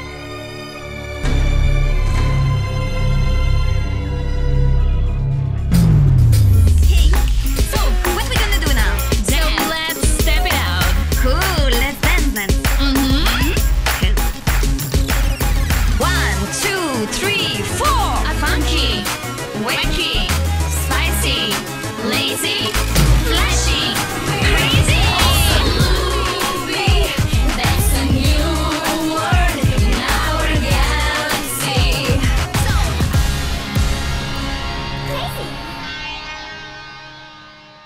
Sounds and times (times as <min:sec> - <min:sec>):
Music: 0:00.0 - 0:37.8.